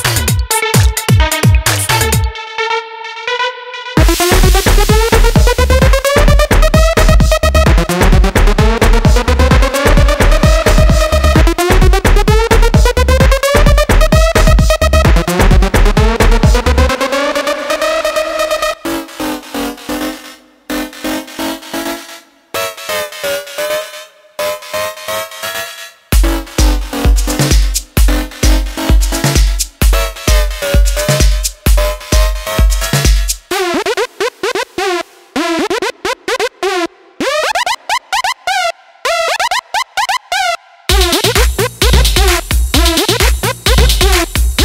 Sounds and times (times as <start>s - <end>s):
House music: 0.0s - 44.6s
Techno: 0.0s - 44.6s.